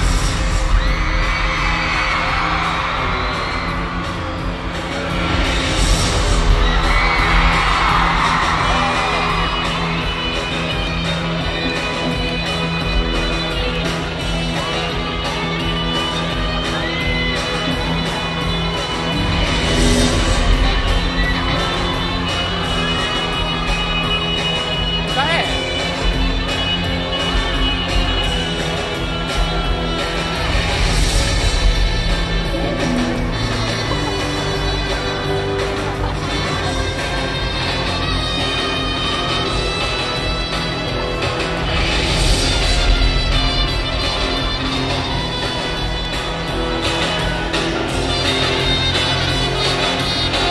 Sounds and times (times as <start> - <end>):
Music: 0.0 - 50.5
Speech: 25.1 - 25.6.